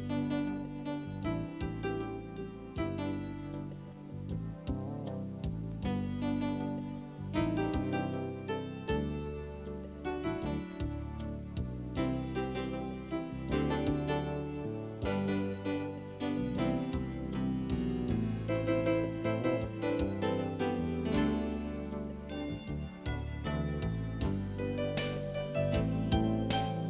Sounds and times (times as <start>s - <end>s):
Music: 0.0s - 26.9s.